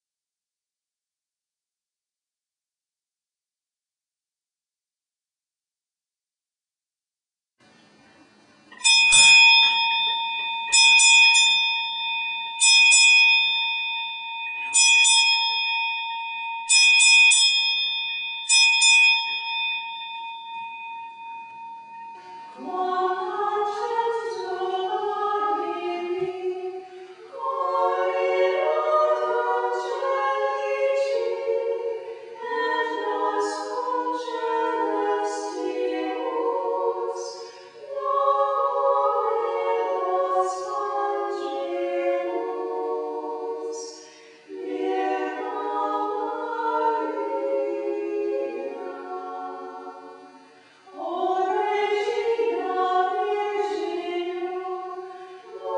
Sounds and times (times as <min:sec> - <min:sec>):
Inside, small room: 0:07.6 - 0:55.7
Music: 0:19.9 - 0:55.7.